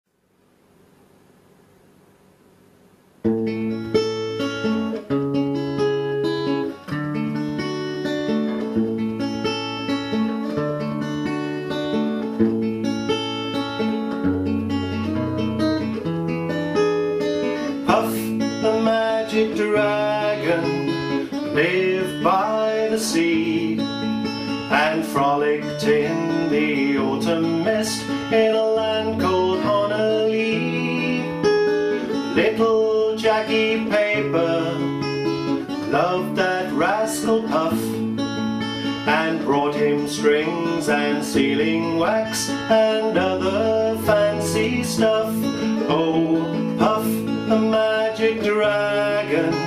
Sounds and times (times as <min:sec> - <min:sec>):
Acoustic guitar: 0:03.2 - 0:49.6
Strum: 0:03.2 - 0:49.6.